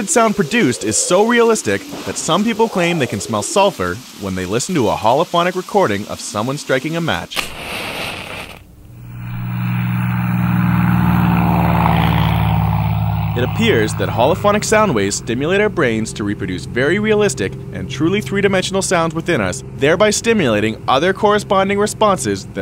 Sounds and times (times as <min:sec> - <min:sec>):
Speech: 0:00.0 - 0:07.4, 0:13.4 - 0:22.6.